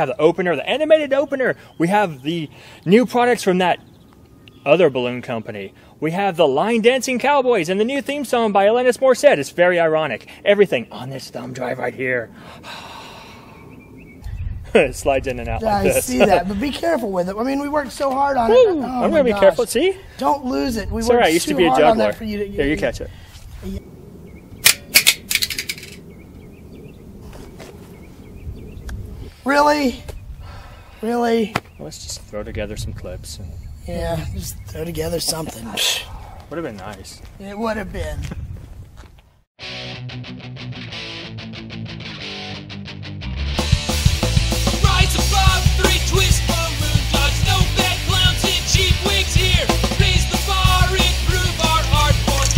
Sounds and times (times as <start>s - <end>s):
Speech: 14.8s - 23.8s, 31.0s - 38.3s.